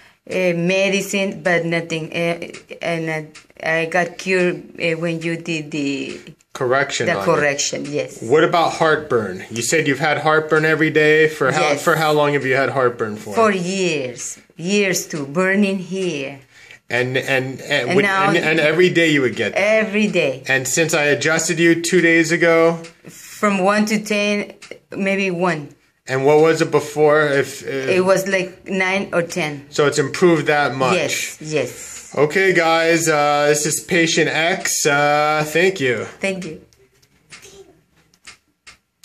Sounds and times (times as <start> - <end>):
Inside, small room: 0.0 - 39.0.